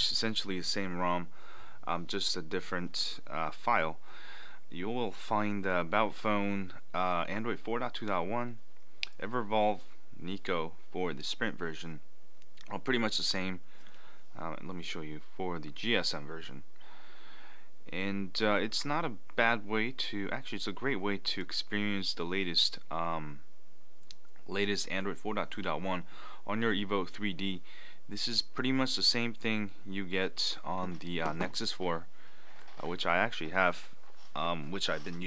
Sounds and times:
Speech: 0:00.0 - 0:01.3, 0:01.9 - 0:04.0, 0:04.7 - 0:12.0, 0:12.6 - 0:13.6, 0:14.4 - 0:16.6, 0:17.9 - 0:23.4, 0:24.5 - 0:32.1, 0:32.8 - 0:35.2
Inside, small room: 0:00.0 - 0:35.2.

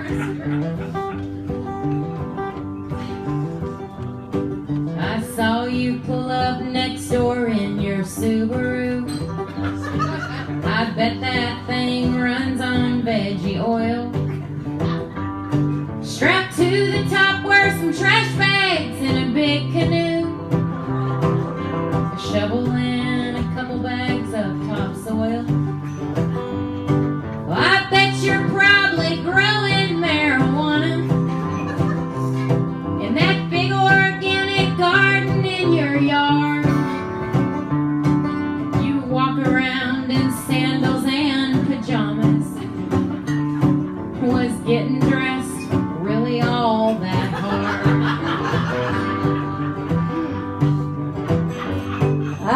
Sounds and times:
Country: 0:00.0 - 0:52.5.

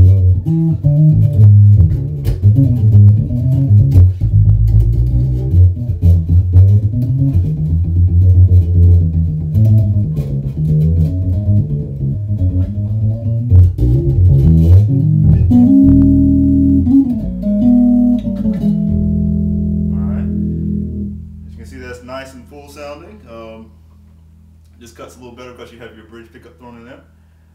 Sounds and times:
Electronic tuner: 0:00.0 - 0:21.6
Bass guitar: 0:00.0 - 0:24.8.

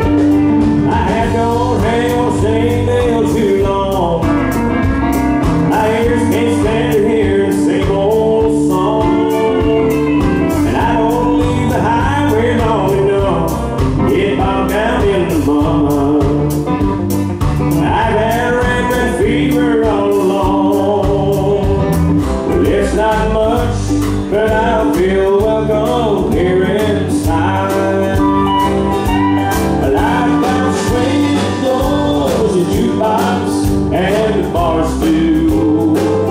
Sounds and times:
Country: 0:00.0 - 0:36.3.

